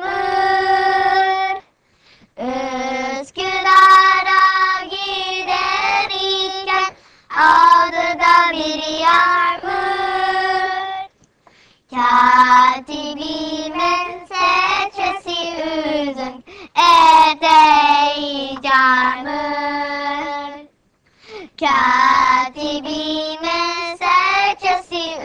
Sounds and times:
Female singing: 0:00.0 - 0:01.6, 0:02.4 - 0:11.1, 0:12.0 - 0:20.7
Child singing: 0:00.0 - 0:01.7, 0:02.4 - 0:11.1, 0:11.9 - 0:20.7, 0:21.6 - 0:25.2.

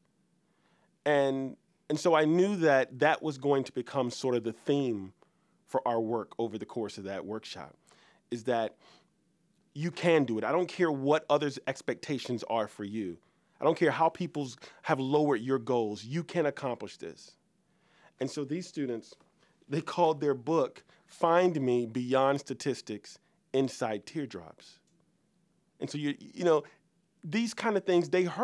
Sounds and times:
Speech: 0:01.1 - 0:08.8, 0:09.8 - 0:17.4, 0:18.2 - 0:24.8, 0:25.8 - 0:28.4.

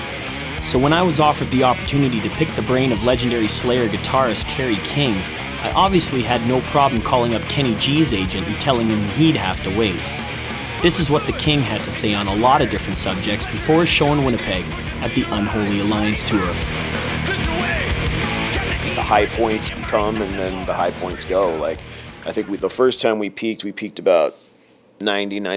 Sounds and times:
Music: 0:00.0 - 0:23.1
Speech: 0:00.6 - 0:10.1, 0:10.8 - 0:16.6, 0:18.6 - 0:24.4, 0:25.0 - 0:25.5.

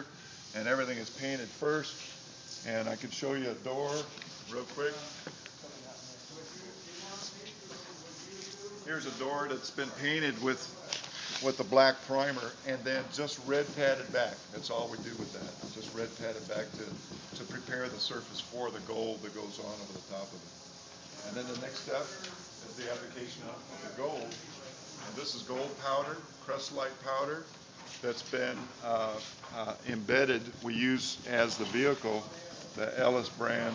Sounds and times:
Speech: 0:00.6 - 0:02.0, 0:02.6 - 0:20.4, 0:21.2 - 0:33.7.

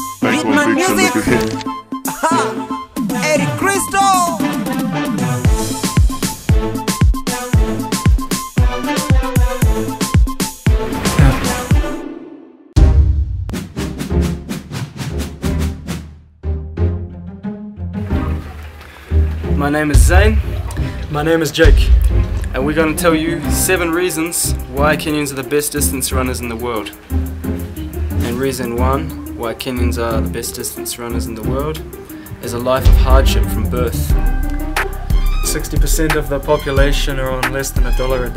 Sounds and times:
Music: 0:00.0 - 0:38.3
Male speech, man speaking: 0:00.2 - 0:01.6, 0:02.2 - 0:04.6, 0:19.6 - 0:27.0, 0:28.2 - 0:34.2, 0:35.4 - 0:38.3.

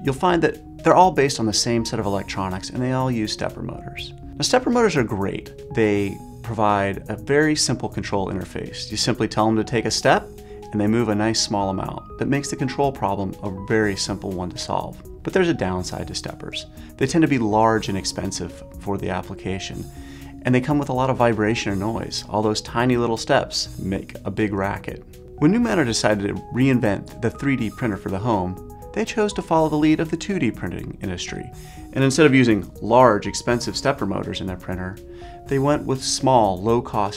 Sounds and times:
Music: 0:00.0 - 0:37.1
Speech: 0:00.0 - 0:37.1.

